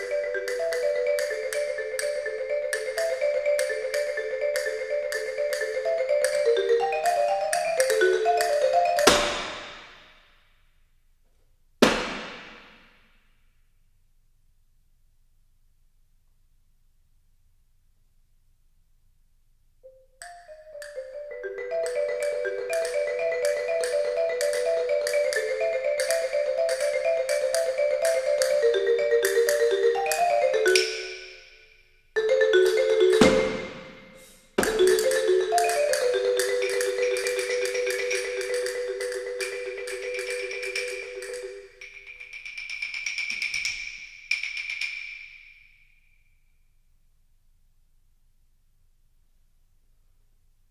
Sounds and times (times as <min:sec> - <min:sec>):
Percussion: 0:00.0 - 0:10.8, 0:11.8 - 0:13.6, 0:19.9 - 0:46.6.